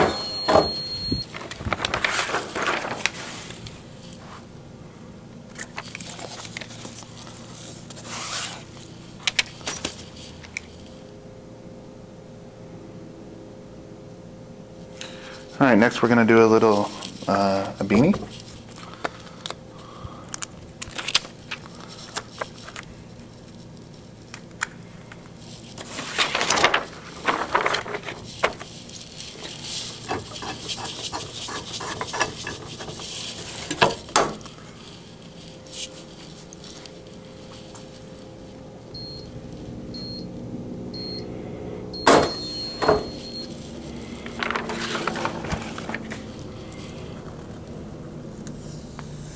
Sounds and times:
Speech: 15.6s - 18.3s.

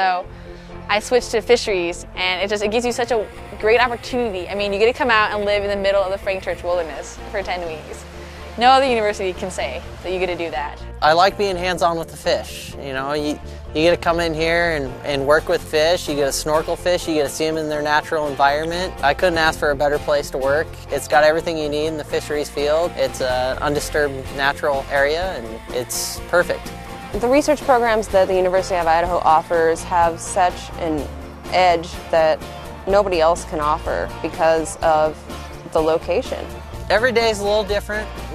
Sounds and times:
Music: 0.0s - 38.3s.

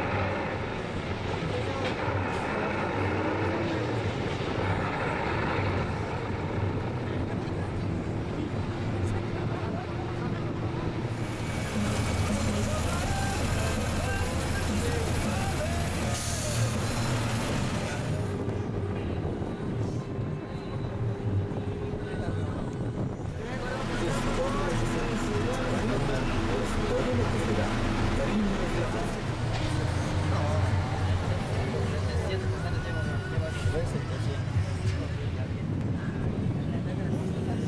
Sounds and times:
Bus: 0.0s - 37.6s
Speech: 6.1s - 11.1s, 21.5s - 37.6s.

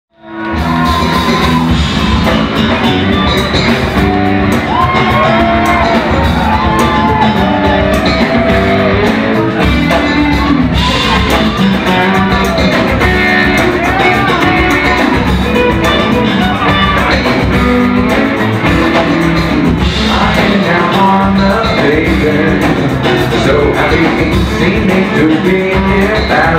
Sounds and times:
Inside, large room or hall: 0.1s - 26.5s
Music: 0.1s - 26.5s.

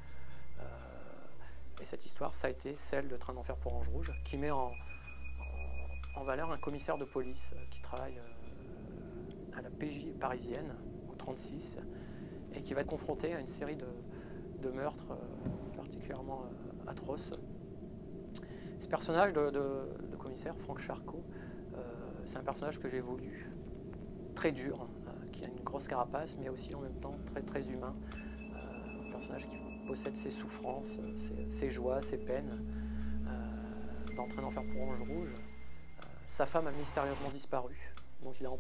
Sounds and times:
Speech: 0.6s - 4.8s, 5.4s - 8.4s, 9.6s - 11.9s, 12.5s - 17.4s, 18.8s - 23.6s, 24.4s - 28.0s, 28.6s - 32.6s, 33.3s - 35.4s, 36.1s - 38.6s.

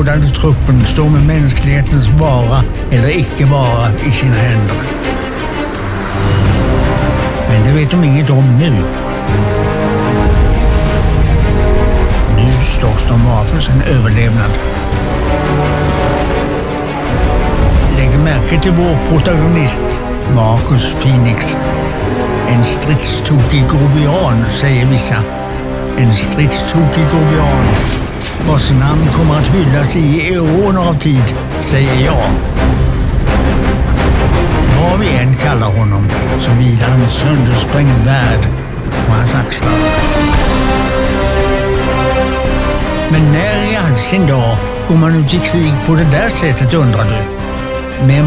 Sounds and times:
Speech: 0.0s - 4.9s, 7.5s - 8.9s, 12.3s - 14.6s, 17.9s - 21.6s, 22.5s - 25.3s, 26.0s - 32.4s, 34.7s - 39.9s, 43.1s - 47.3s, 48.0s - 48.2s
Music: 0.0s - 48.2s.

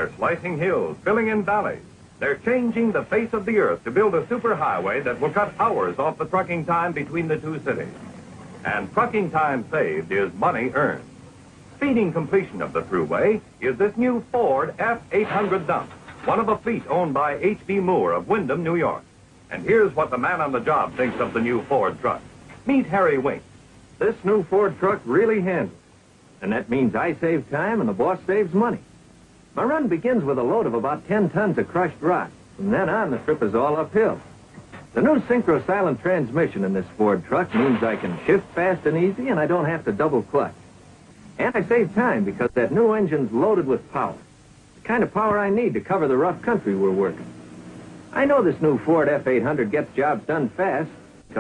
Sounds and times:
Speech: 0.0s - 8.0s, 8.6s - 11.1s, 11.8s - 25.8s, 26.4s - 28.9s, 29.6s - 40.6s, 41.4s - 47.3s, 48.1s - 51.4s.

